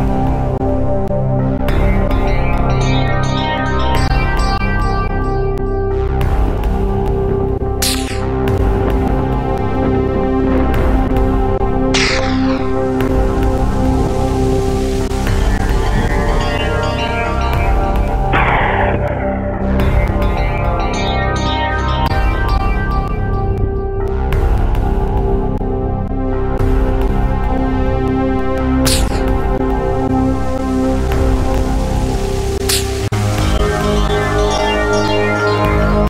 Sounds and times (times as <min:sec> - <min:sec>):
Music: 0:00.0 - 0:36.0.